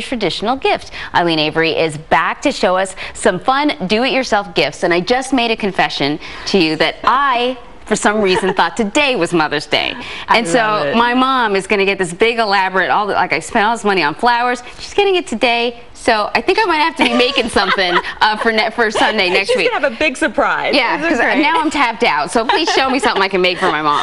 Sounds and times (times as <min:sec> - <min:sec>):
Speech: 0:03.5 - 0:24.0.